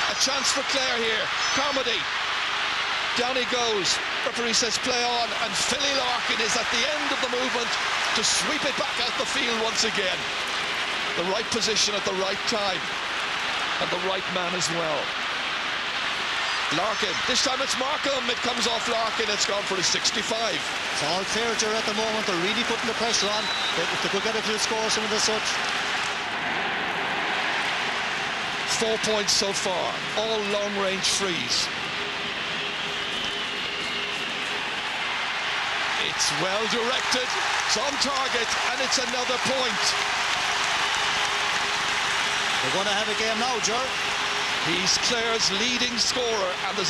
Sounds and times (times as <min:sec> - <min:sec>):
Speech: 0:00.0 - 0:02.0, 0:03.2 - 0:10.2, 0:11.2 - 0:12.9, 0:13.8 - 0:15.1, 0:16.7 - 0:25.6, 0:28.7 - 0:31.7, 0:36.0 - 0:40.0, 0:42.6 - 0:44.0, 0:44.6 - 0:46.8.